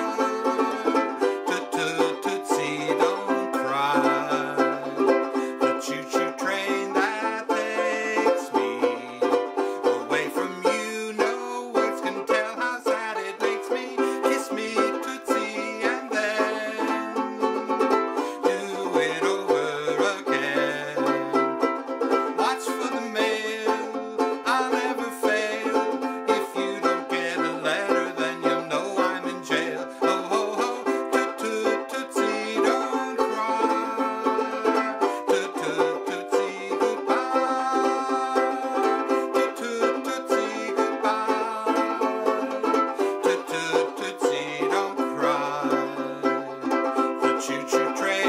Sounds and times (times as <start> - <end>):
Music: 0.0 - 48.2.